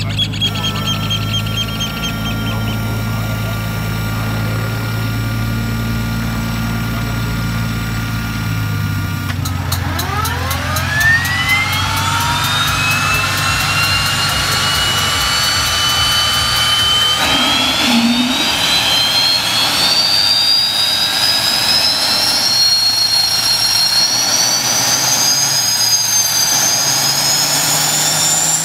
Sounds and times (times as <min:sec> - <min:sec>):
Vehicle: 0:00.0 - 0:28.6
Accelerating, revving, vroom: 0:09.4 - 0:28.6
Engine starting: 0:09.4 - 0:28.6.